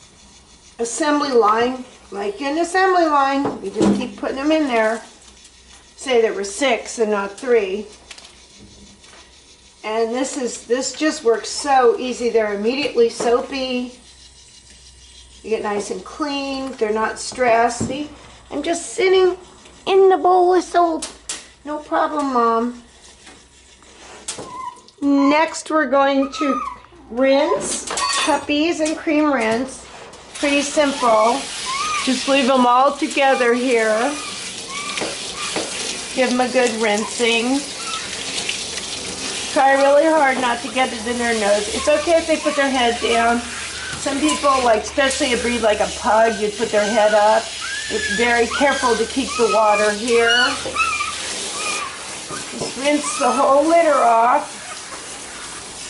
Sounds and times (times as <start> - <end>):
Bathtub (filling or washing): 0.0 - 55.9
Speech: 0.8 - 5.1, 6.0 - 7.9, 9.8 - 14.0, 15.4 - 22.8, 25.0 - 29.8, 30.4 - 34.2, 36.2 - 37.7, 39.5 - 50.7, 52.8 - 54.6
Dog: 24.4 - 25.4, 26.2 - 28.4, 30.4 - 35.8, 36.6 - 38.4, 40.1 - 45.5, 46.1 - 55.7.